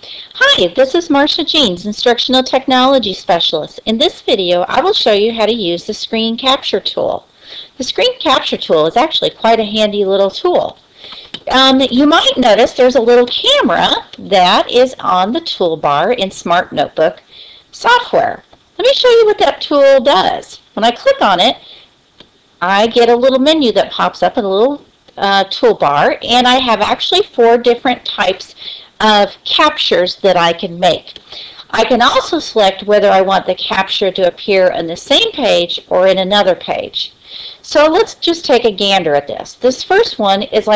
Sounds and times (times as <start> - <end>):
Speech: 0.2 - 10.8, 11.4 - 21.8, 22.6 - 40.7.